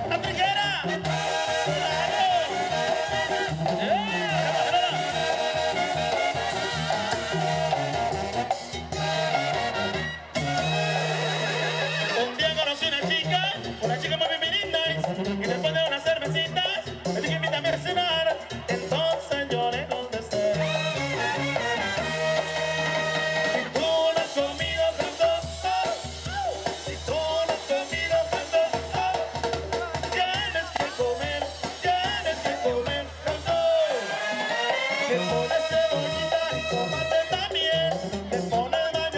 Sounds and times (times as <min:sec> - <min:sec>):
Music: 0:00.0 - 0:39.1.